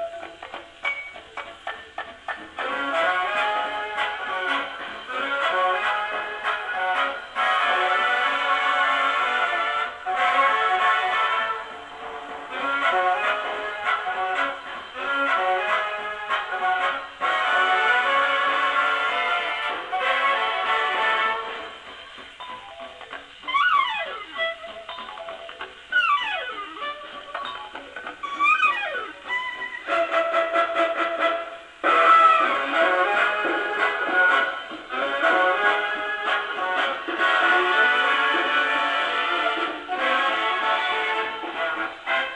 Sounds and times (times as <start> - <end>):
Inside, small room: 0.0 - 42.3
Music: 0.0 - 42.3.